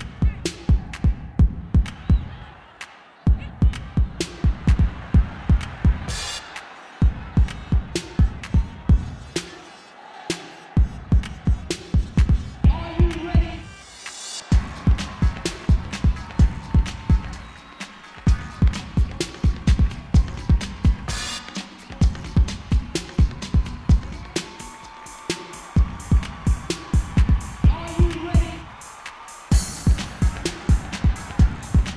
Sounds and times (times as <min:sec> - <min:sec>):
House music: 0:00.0 - 0:31.9
Speech: 0:12.6 - 0:13.7, 0:27.6 - 0:28.7.